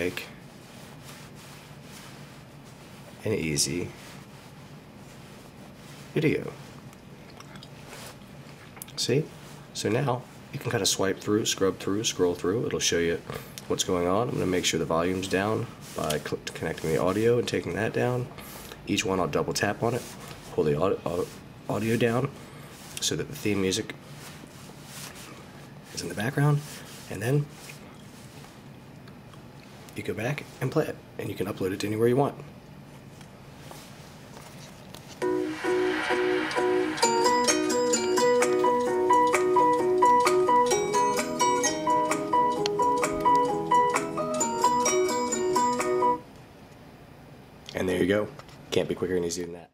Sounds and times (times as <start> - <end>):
Music: 35.2 - 46.2.